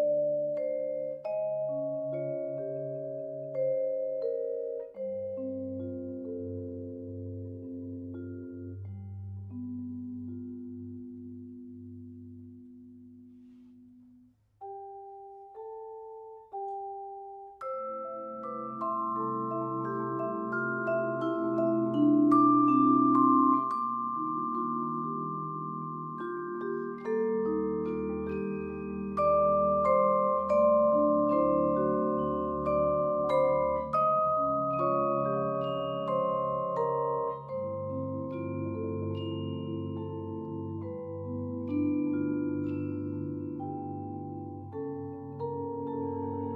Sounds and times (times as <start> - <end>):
Marimba, xylophone: 0.0 - 14.0, 14.6 - 46.5
Glockenspiel: 0.0 - 46.5.